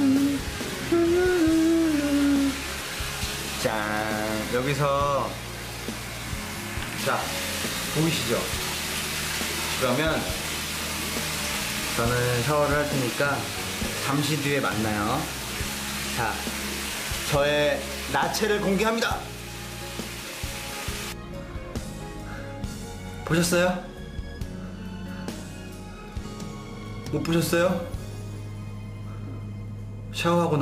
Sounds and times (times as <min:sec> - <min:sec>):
Music: 0:00.0 - 0:30.6
Speech: 0:03.6 - 0:05.4, 0:07.0 - 0:07.4, 0:08.0 - 0:08.5, 0:09.8 - 0:10.4, 0:12.0 - 0:15.3, 0:16.2 - 0:16.5, 0:17.3 - 0:19.3, 0:23.2 - 0:23.9, 0:27.1 - 0:27.9, 0:30.2 - 0:30.6.